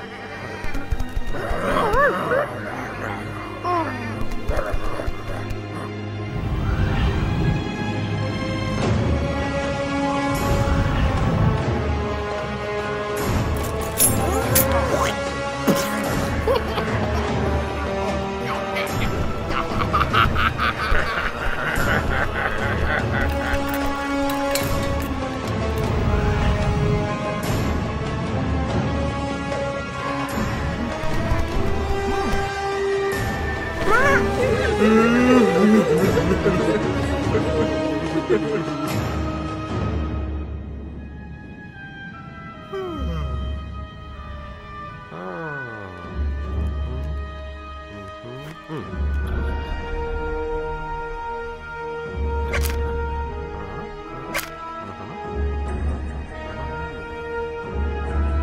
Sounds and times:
Music: 0.0s - 58.4s.

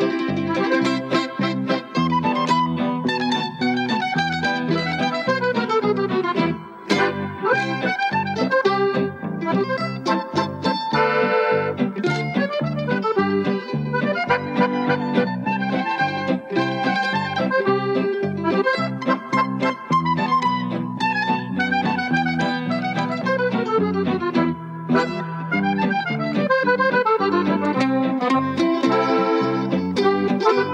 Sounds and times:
Music: 0.0s - 30.7s.

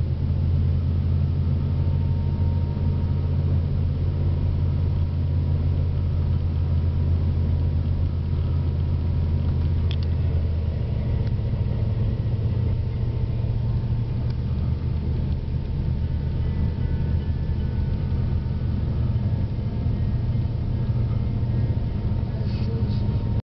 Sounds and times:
Car: 0.0s - 23.4s.

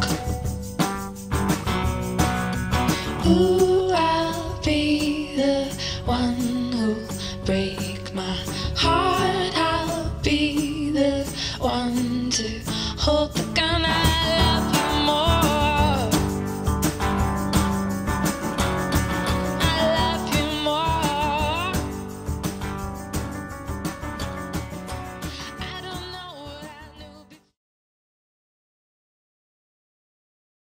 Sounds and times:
Music: 0.0s - 27.6s.

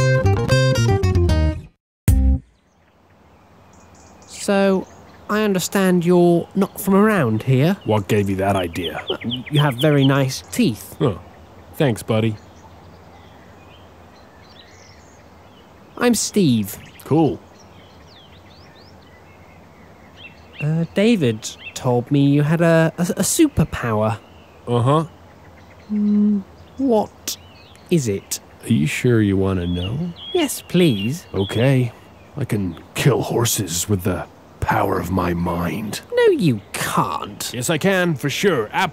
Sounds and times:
Speech: 4.3s - 11.2s, 11.8s - 12.4s, 16.0s - 17.4s, 20.6s - 25.1s, 25.9s - 38.9s.

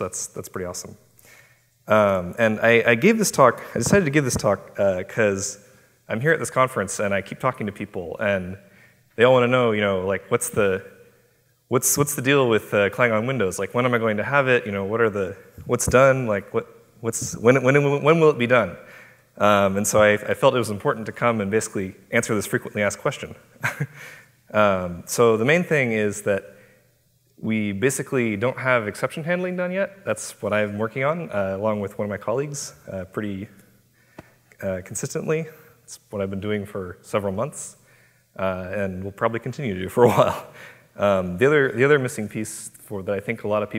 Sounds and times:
Speech: 0.0s - 1.0s, 1.9s - 8.6s, 9.2s - 11.0s, 11.7s - 23.4s, 24.5s - 26.5s, 27.4s - 33.6s, 34.6s - 37.8s, 38.4s - 43.7s.

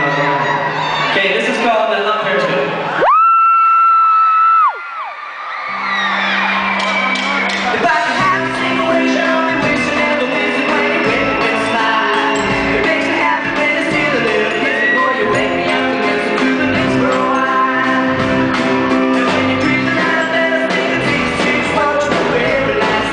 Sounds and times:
Music: 5.7s - 23.1s.

